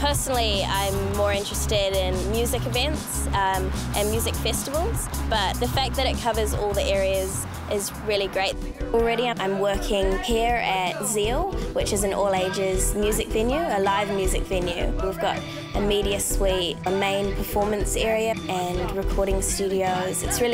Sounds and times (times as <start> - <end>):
Music: 0.0 - 20.5
Speech: 0.0 - 20.5.